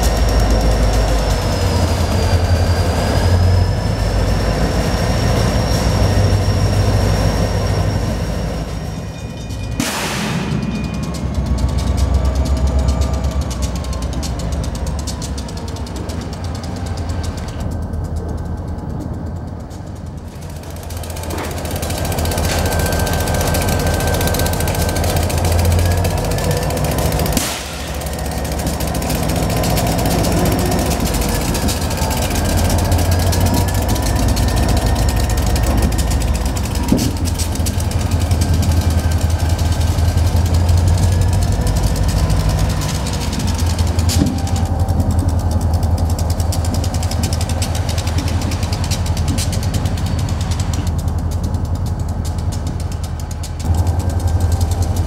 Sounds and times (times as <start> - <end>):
Outside, urban or manmade: 0.0 - 55.0
Railroad car, train wagon: 0.0 - 55.0
Train: 0.0 - 55.0.